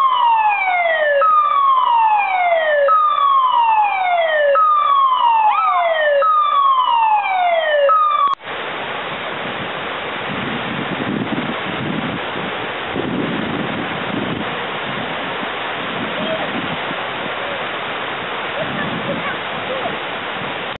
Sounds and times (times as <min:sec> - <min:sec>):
Speech: 0:16.1 - 0:16.6, 0:17.3 - 0:17.7, 0:18.6 - 0:20.0.